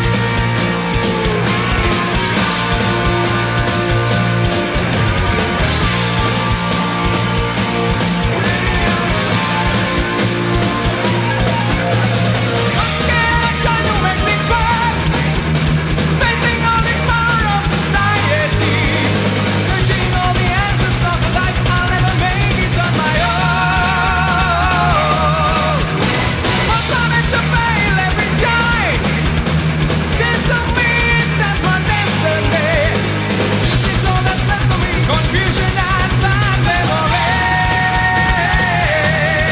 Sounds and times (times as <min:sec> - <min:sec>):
Music: 0:00.0 - 0:39.5.